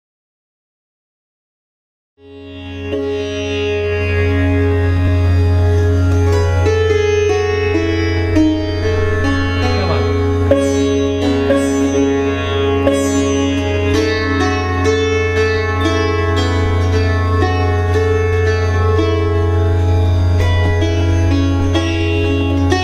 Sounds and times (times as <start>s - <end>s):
Carnatic music: 2.2s - 22.8s
Sitar: 2.2s - 22.8s
Speech: 9.6s - 10.2s.